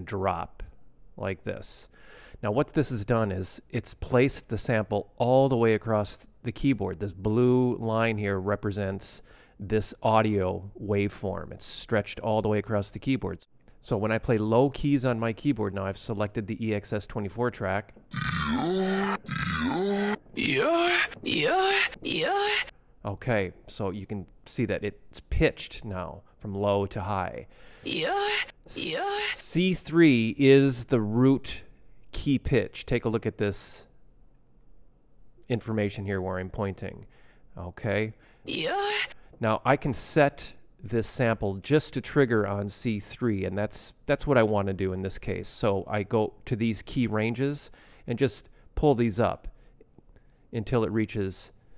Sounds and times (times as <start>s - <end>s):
Speech: 0.0s - 33.9s, 35.5s - 49.5s, 50.6s - 51.6s.